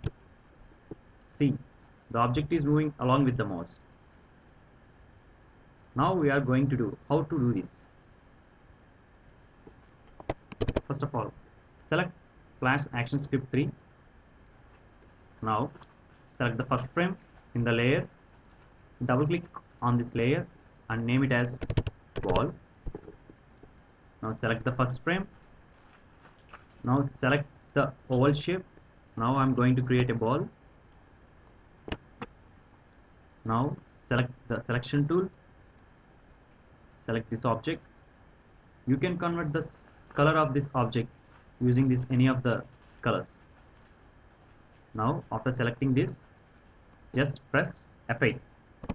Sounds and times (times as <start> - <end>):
Speech: 1.3 - 3.8, 6.0 - 7.9, 10.8 - 13.8, 15.4 - 15.8, 16.4 - 18.1, 19.0 - 21.6, 22.2 - 22.6, 24.2 - 25.4, 26.8 - 30.6, 33.4 - 35.4, 37.0 - 37.9, 38.9 - 43.4, 44.9 - 46.3, 47.2 - 48.5.